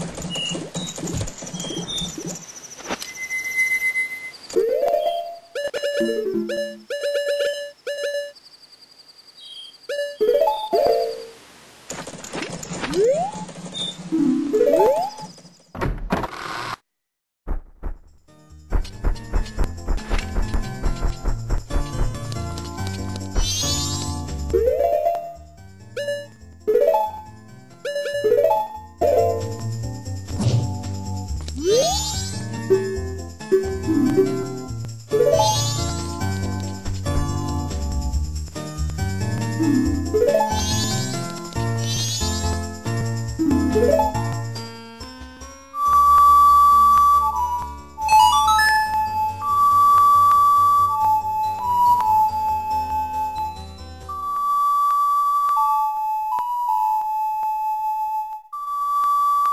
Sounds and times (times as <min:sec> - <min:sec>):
Music: 0:04.6 - 0:08.1, 0:18.0 - 0:59.5.